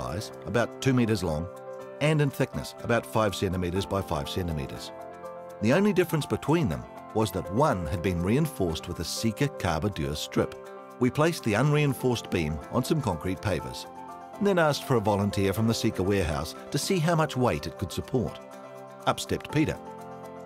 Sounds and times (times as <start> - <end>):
Speech: 0.0 - 4.9, 5.6 - 18.4, 19.0 - 19.8
Music: 0.0 - 20.4.